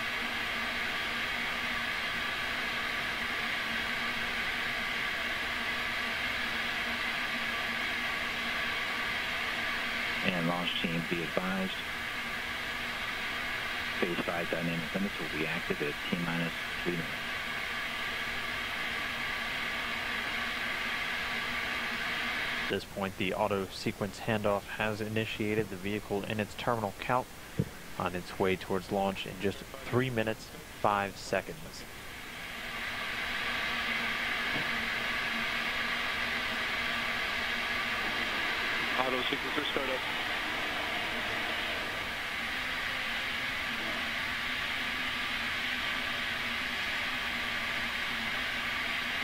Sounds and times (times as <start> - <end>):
Speech: 10.2 - 11.8, 14.0 - 17.2, 22.7 - 27.3, 28.0 - 31.9, 39.0 - 40.0.